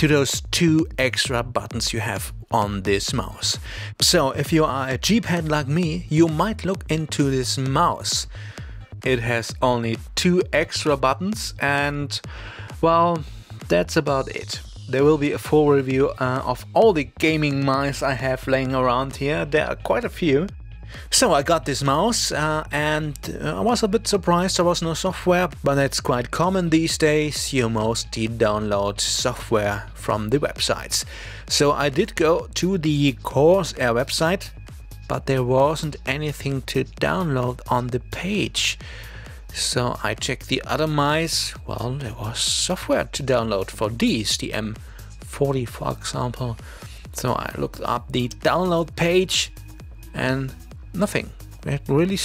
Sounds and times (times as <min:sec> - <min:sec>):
Speech: 0:00.0 - 0:08.4, 0:09.0 - 0:20.5, 0:21.1 - 0:38.8, 0:39.5 - 0:52.2
Music: 0:00.0 - 0:52.2.